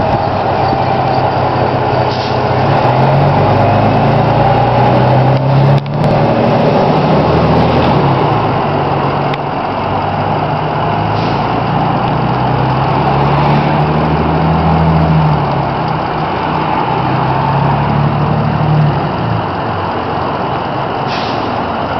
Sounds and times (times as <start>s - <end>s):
Bus: 0.0s - 21.9s
Outside, urban or manmade: 0.0s - 21.9s.